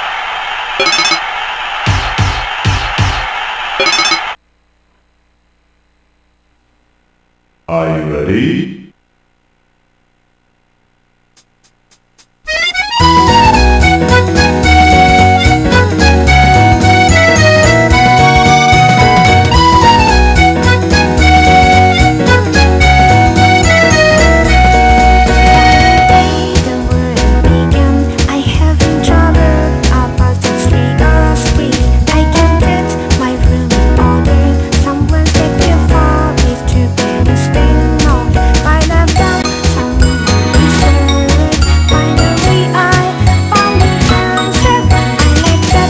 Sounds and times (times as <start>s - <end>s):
Music: 12.5s - 45.9s.